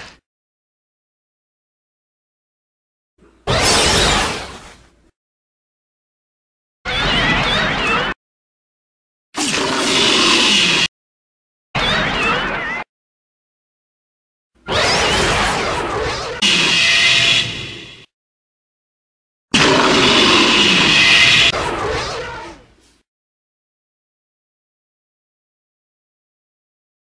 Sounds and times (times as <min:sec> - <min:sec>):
Roar: 0:09.4 - 0:10.9, 0:19.6 - 0:22.7.